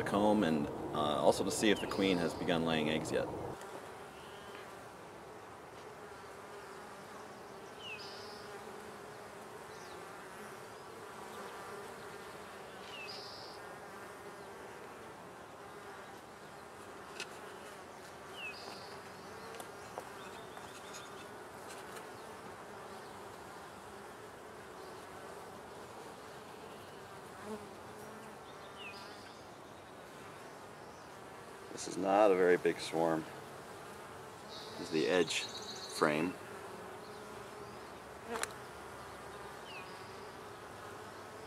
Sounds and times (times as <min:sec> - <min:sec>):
Bee, wasp, etc.: 0:00.0 - 0:41.4
Fly, housefly: 0:00.0 - 0:41.4.